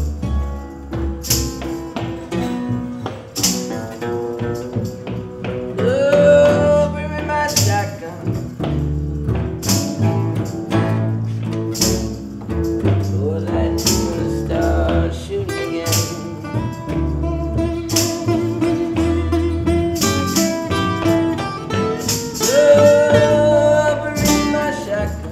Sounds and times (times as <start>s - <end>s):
Music: 0.0s - 25.3s.